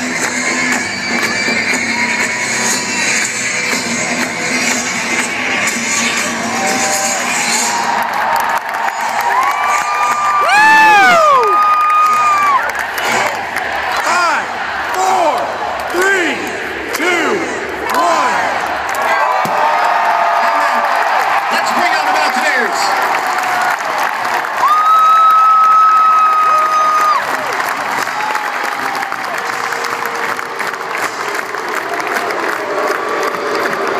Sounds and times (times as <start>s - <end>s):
Cheering: 0.0s - 33.9s.